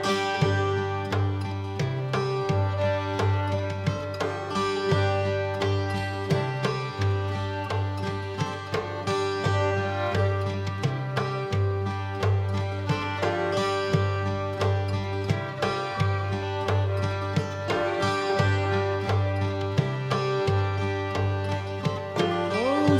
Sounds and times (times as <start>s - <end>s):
Music: 0.0s - 22.9s.